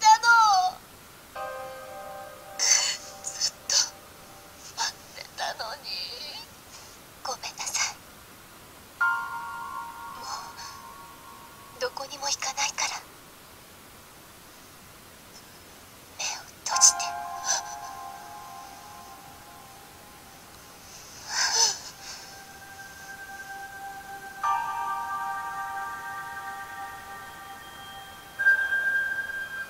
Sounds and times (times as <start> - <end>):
Speech: 0.0 - 0.8, 2.6 - 3.9, 4.8 - 6.5, 7.2 - 8.0, 11.8 - 13.1, 16.2 - 17.6
Music: 1.4 - 4.9, 9.0 - 11.8, 16.8 - 20.9, 21.6 - 29.6.